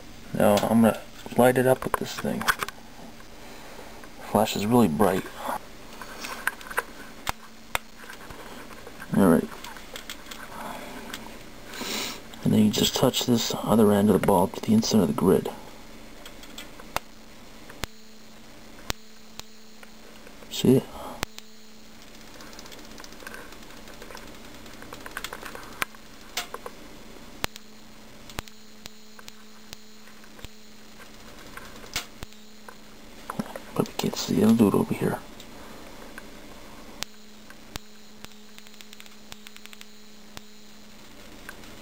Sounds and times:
Speech: 0:00.3 - 0:02.5, 0:04.2 - 0:05.6, 0:09.1 - 0:09.5, 0:12.4 - 0:15.6, 0:20.5 - 0:21.0, 0:33.8 - 0:35.2.

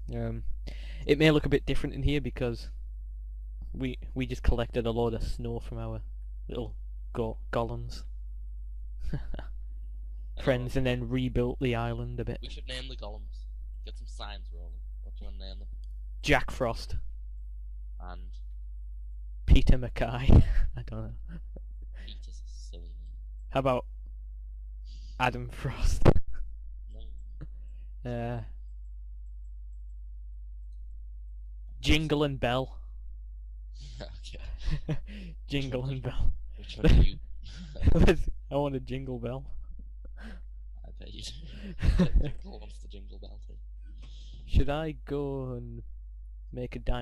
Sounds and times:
Speech: 0:00.1 - 0:00.4, 0:01.0 - 0:02.7, 0:03.8 - 0:08.0, 0:10.4 - 0:15.6, 0:16.2 - 0:17.0, 0:18.0 - 0:18.4, 0:19.5 - 0:21.2, 0:22.0 - 0:23.0, 0:23.6 - 0:23.8, 0:25.0 - 0:26.1, 0:28.1 - 0:28.5, 0:31.8 - 0:32.8, 0:33.8 - 0:39.5, 0:40.9 - 0:45.8, 0:46.6 - 0:47.0.

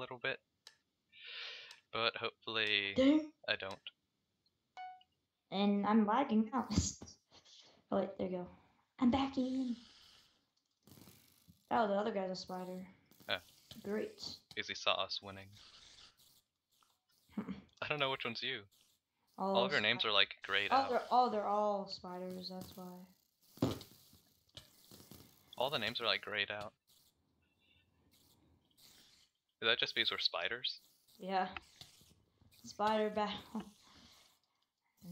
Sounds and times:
Speech: 0:00.0 - 0:00.4, 0:02.0 - 0:03.9, 0:11.7 - 0:12.9, 0:13.8 - 0:15.4, 0:17.8 - 0:18.6, 0:19.4 - 0:23.1, 0:25.6 - 0:26.7, 0:29.6 - 0:31.6, 0:32.7 - 0:33.6.

